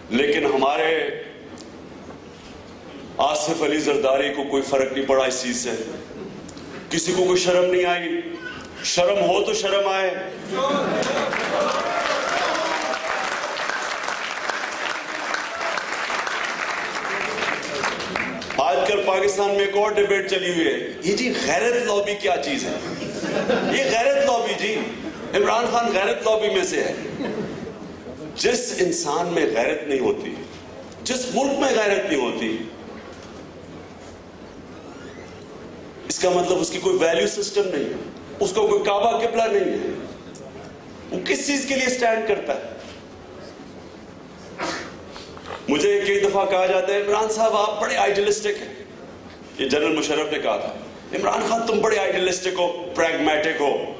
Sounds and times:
Narration, monologue: 0.0 - 11.2, 18.5 - 34.7, 35.3 - 54.0
Male speech, man speaking: 0.1 - 1.4, 3.2 - 6.0, 6.9 - 10.9, 18.6 - 22.8, 23.7 - 27.0, 28.4 - 32.8, 36.1 - 40.0, 41.1 - 42.8, 45.7 - 48.8, 49.6 - 54.0.

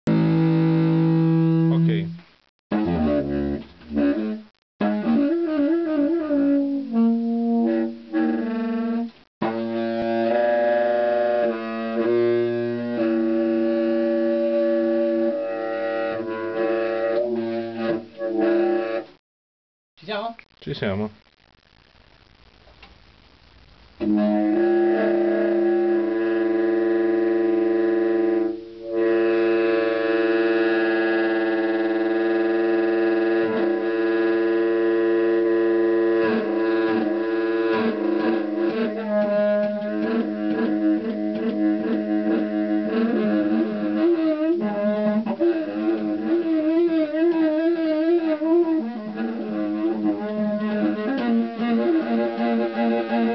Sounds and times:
Jazz: 0.1 - 19.2, 21.2 - 53.3
Speech: 1.7 - 2.1, 20.0 - 21.2
Saxophone: 2.7 - 19.2, 24.0 - 53.3.

